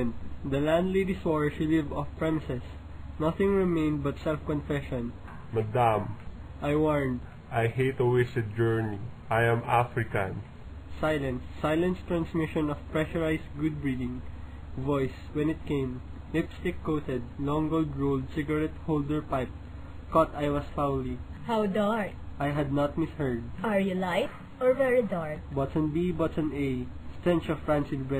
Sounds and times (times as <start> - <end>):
Speech: 0.0 - 10.4, 11.0 - 19.5, 20.1 - 28.1.